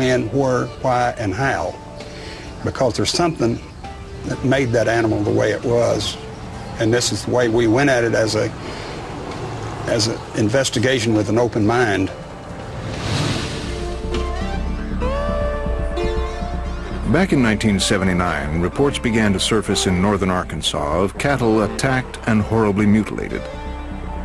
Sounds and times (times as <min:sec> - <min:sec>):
Speech: 0:00.0 - 0:01.8, 0:02.6 - 0:03.6, 0:04.3 - 0:06.2, 0:06.8 - 0:08.5, 0:09.9 - 0:12.2, 0:17.1 - 0:23.5
Music: 0:00.0 - 0:24.2.